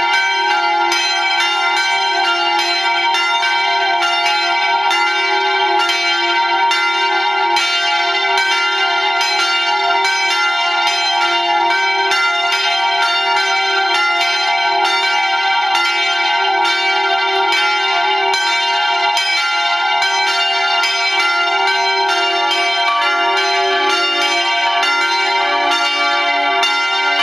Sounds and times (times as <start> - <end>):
Bell: 0.0 - 27.2.